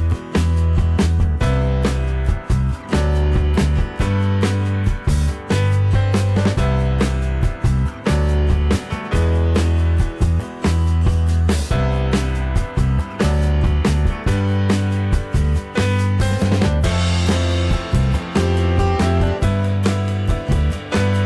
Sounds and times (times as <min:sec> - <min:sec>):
Music: 0:00.0 - 0:21.2.